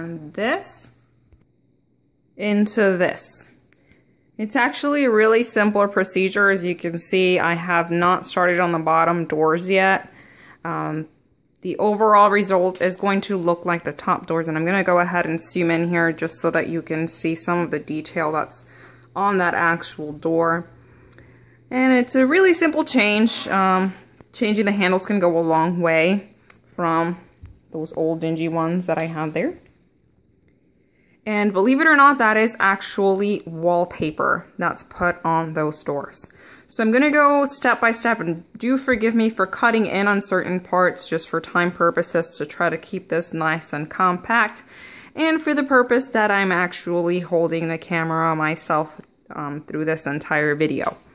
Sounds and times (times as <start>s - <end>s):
Speech: 0.0s - 1.0s, 2.4s - 3.6s, 4.4s - 20.8s, 21.7s - 29.8s, 31.3s - 51.1s.